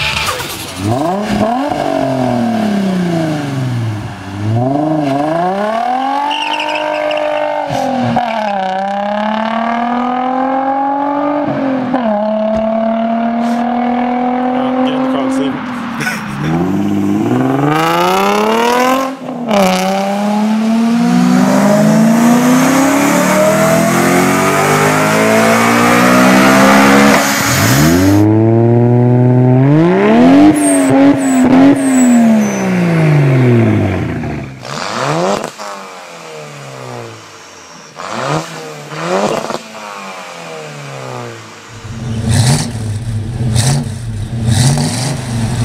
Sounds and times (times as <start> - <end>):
Speech: 14.5 - 16.6.